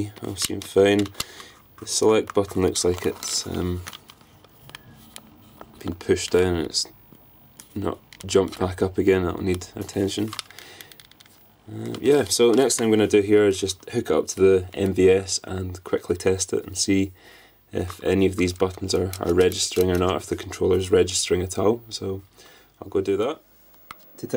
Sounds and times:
Speech: 0.0s - 1.1s, 1.8s - 3.9s, 5.8s - 7.0s, 7.8s - 10.4s, 11.7s - 23.4s
Inside, small room: 0.0s - 24.3s.

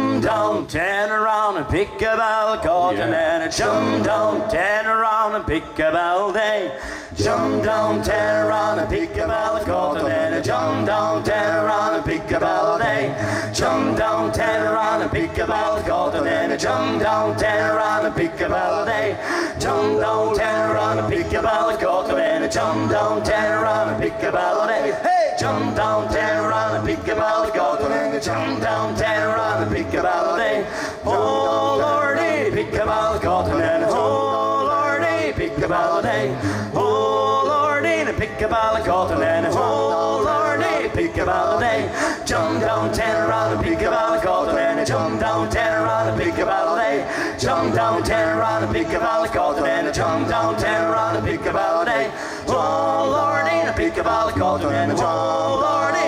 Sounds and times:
Music: 0.0s - 56.0s.

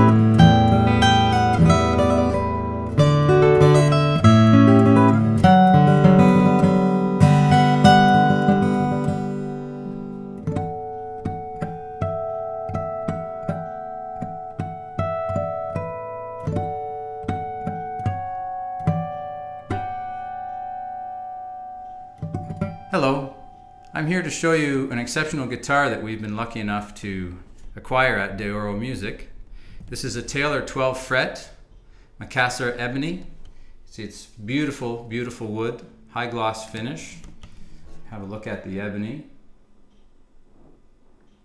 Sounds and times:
Acoustic guitar: 0.0s - 38.9s
Strum: 0.0s - 41.4s.

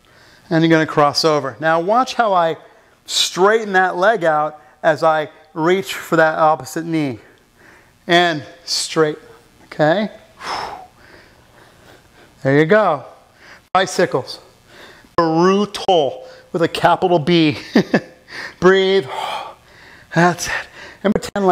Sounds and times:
Speech: 0.5s - 7.3s, 8.1s - 10.2s, 12.4s - 13.2s, 13.8s - 14.5s, 15.2s - 17.6s, 18.6s - 19.3s, 20.1s - 21.5s.

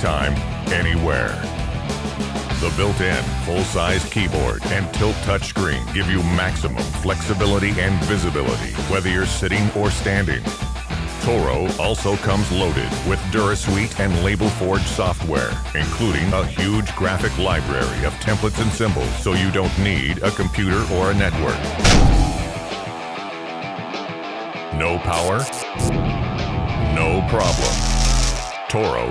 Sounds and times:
Speech: 0.0s - 1.5s, 2.6s - 10.5s, 11.2s - 21.8s, 24.7s - 25.6s, 26.9s - 27.8s, 28.6s - 29.1s
Music: 0.0s - 29.1s.

